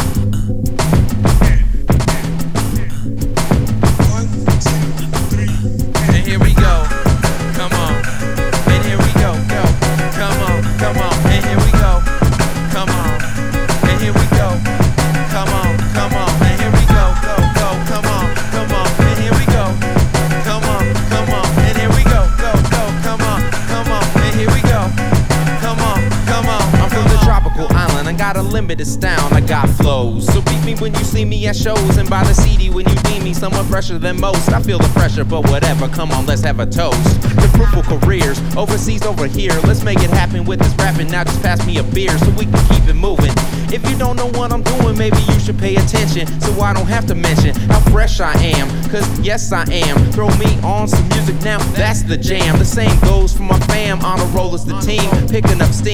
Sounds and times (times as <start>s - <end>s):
Middle Eastern music: 1.3s - 31.0s, 36.8s - 55.9s
New-age music: 2.0s - 28.6s.